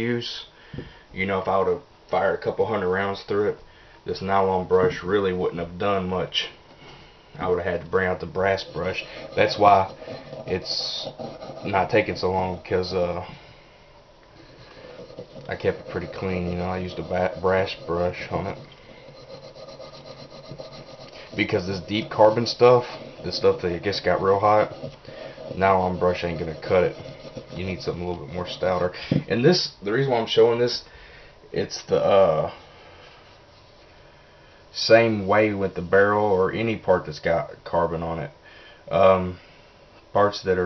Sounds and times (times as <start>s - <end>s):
Speech: 0.0s - 0.5s, 1.2s - 6.6s, 7.4s - 13.4s, 15.5s - 18.6s, 21.4s - 24.8s, 25.5s - 30.9s, 31.5s - 32.6s, 34.8s - 39.4s, 40.1s - 40.6s.